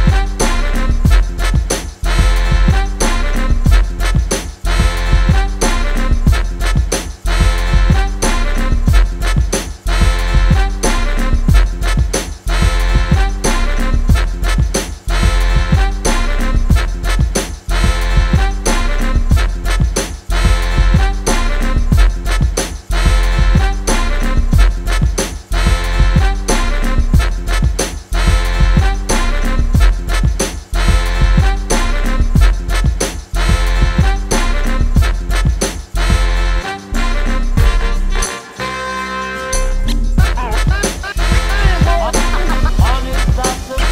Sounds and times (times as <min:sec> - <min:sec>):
Music: 0:00.0 - 0:43.9.